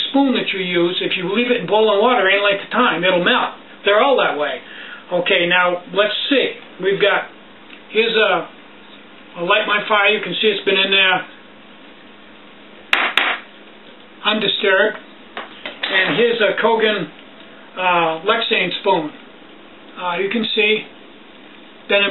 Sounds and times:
Speech: 0.0 - 8.6, 9.4 - 11.4, 14.2 - 15.1, 15.8 - 17.2, 17.8 - 19.2, 20.0 - 20.9, 21.9 - 22.1.

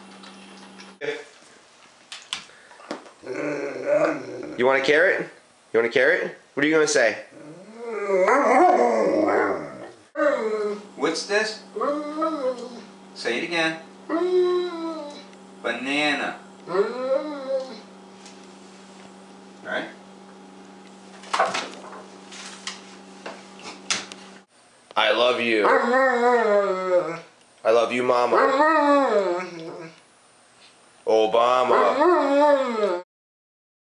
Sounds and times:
Speech: 1.0 - 1.3, 4.6 - 7.3, 11.0 - 11.6, 13.2 - 13.8, 15.6 - 16.4, 19.6 - 20.0, 25.0 - 25.7, 27.6 - 28.5, 31.0 - 32.0.

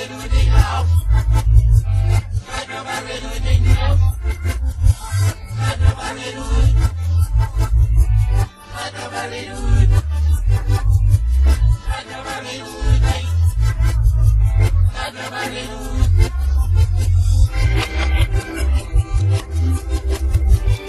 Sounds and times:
Music: 0.0 - 20.8.

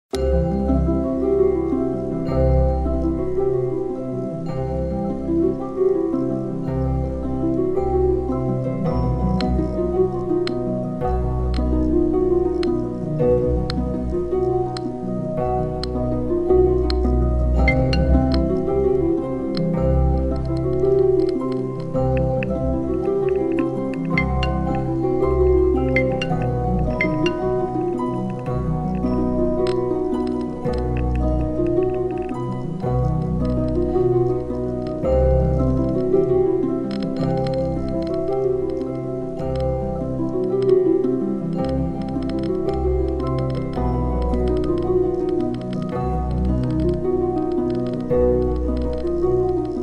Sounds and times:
Music: 0.1 - 49.8.

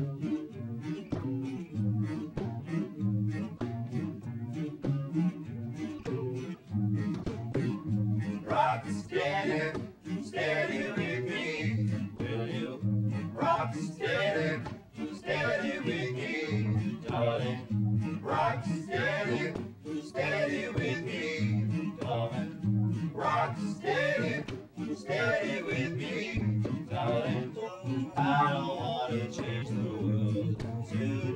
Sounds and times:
Ska: 0.0 - 31.3.

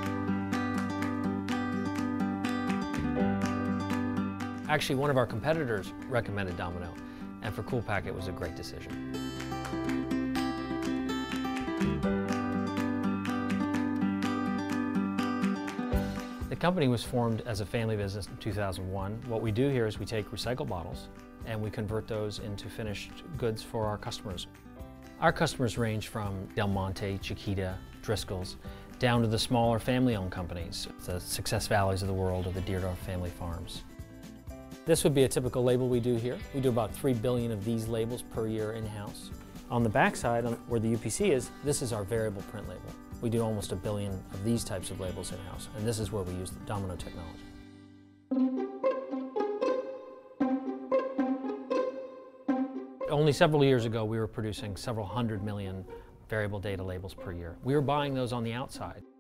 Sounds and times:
Music: 0.0 - 59.2
Speech: 4.7 - 9.0, 16.5 - 24.5, 25.2 - 33.8, 34.9 - 47.4, 53.1 - 59.1.

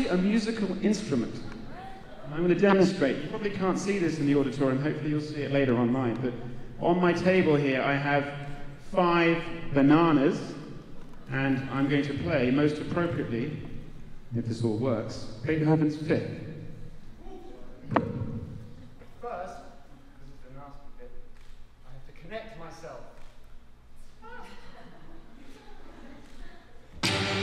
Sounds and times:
Speech: 19.1 - 23.2.

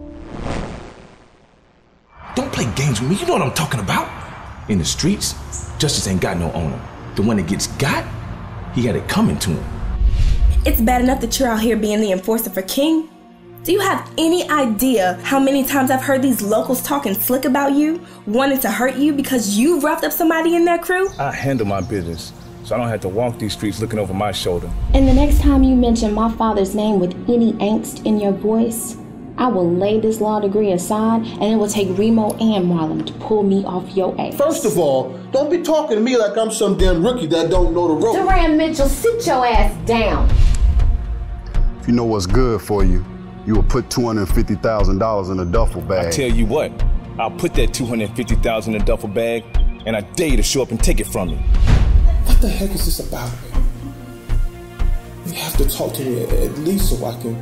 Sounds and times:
Music: 2.2 - 57.4.

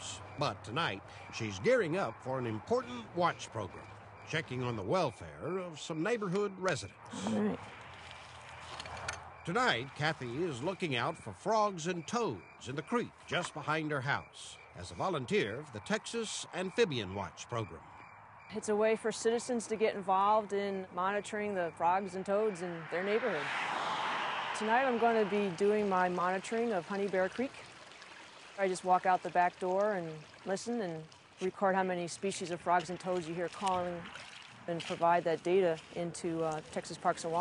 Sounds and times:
Speech: 0.0 - 7.6, 9.5 - 17.8, 18.5 - 23.5, 28.6 - 34.0, 34.7 - 37.4.

